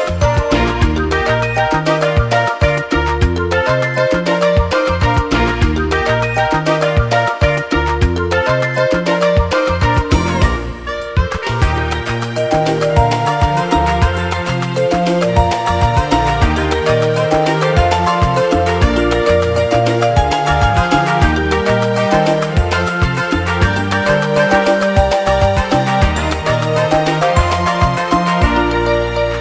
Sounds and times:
Music: 0.0s - 29.4s.

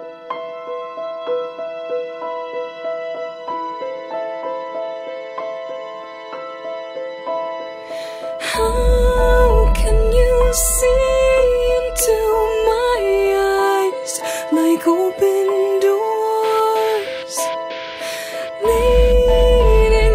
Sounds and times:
Music: 0.0s - 20.1s.

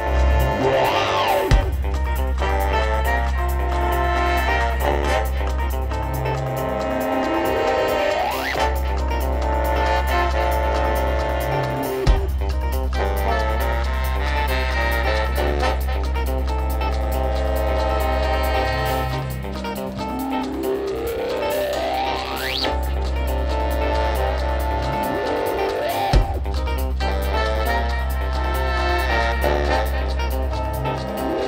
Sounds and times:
Music: 0.0s - 31.4s.

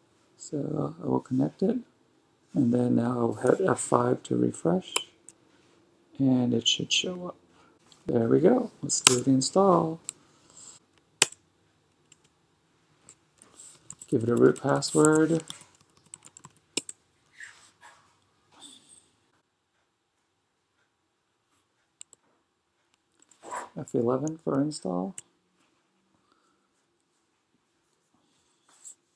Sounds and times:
Speech: 0.4s - 1.9s, 2.5s - 5.2s, 6.1s - 7.4s, 8.0s - 10.1s, 14.1s - 15.5s, 23.8s - 25.2s.

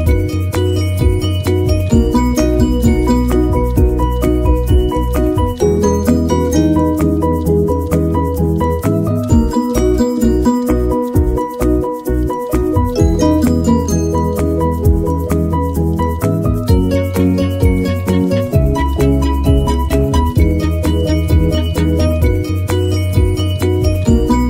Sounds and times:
Music: 0.0s - 24.5s.

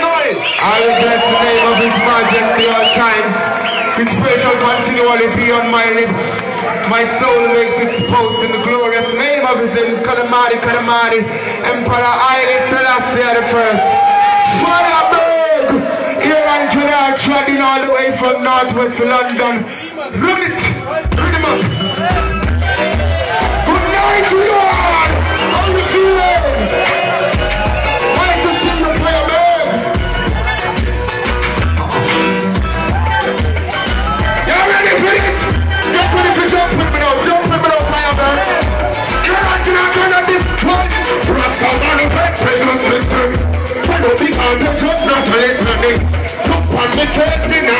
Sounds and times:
Speech: 0.0s - 13.8s, 14.5s - 21.6s.

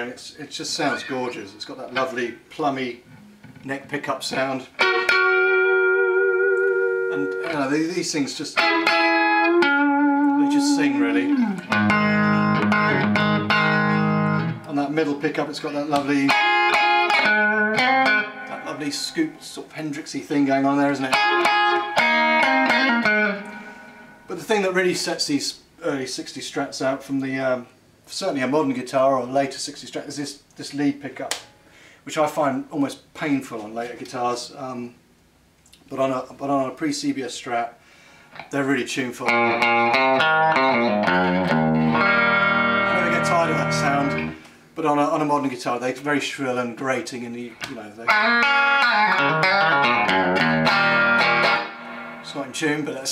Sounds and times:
Tapping (guitar technique): 4.7s - 7.7s, 8.6s - 14.7s, 15.9s - 19.0s, 21.1s - 24.0s, 39.3s - 44.4s, 47.6s - 52.3s.

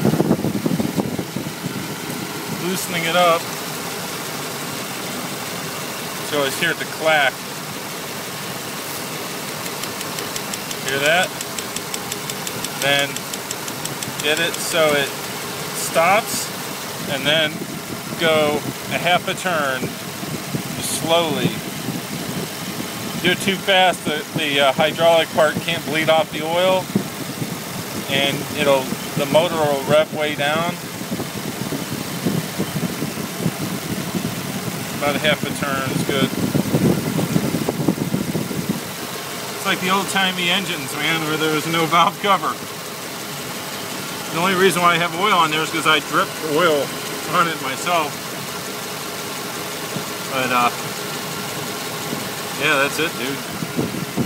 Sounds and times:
Engine: 0.0s - 54.2s
Speech: 2.6s - 3.5s, 6.3s - 7.4s, 10.8s - 11.4s, 12.8s - 13.2s, 14.2s - 15.2s, 15.8s - 16.5s, 17.1s - 19.9s, 20.8s - 21.6s, 23.2s - 26.9s, 28.1s - 30.8s, 35.0s - 36.4s, 39.6s - 42.6s, 44.3s - 48.2s, 50.3s - 50.8s, 52.6s - 53.5s.

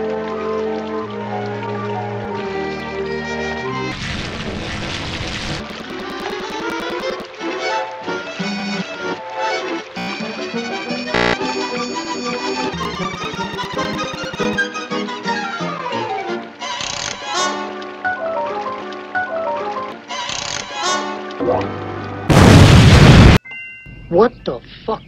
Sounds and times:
Music: 0.0s - 4.0s, 5.7s - 22.3s, 23.4s - 25.0s.

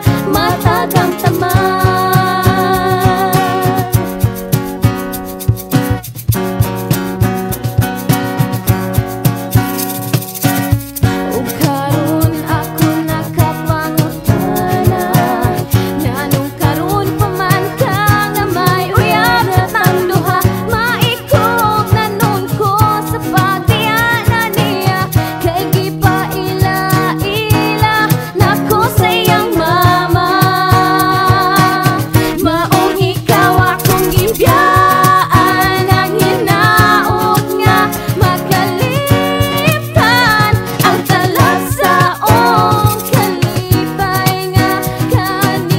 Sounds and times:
Singing: 0.0s - 4.0s, 11.6s - 45.7s
Music: 0.0s - 45.7s.

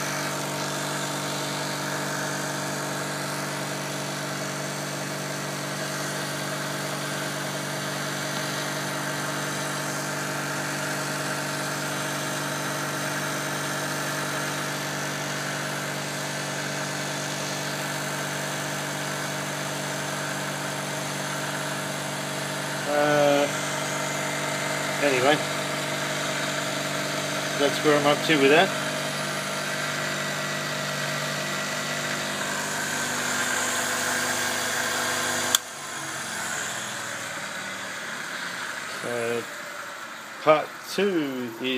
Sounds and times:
Power tool: 0.0s - 41.7s
Speech: 22.9s - 23.5s, 25.0s - 25.4s, 27.6s - 28.8s, 39.0s - 39.5s, 40.4s - 41.7s.

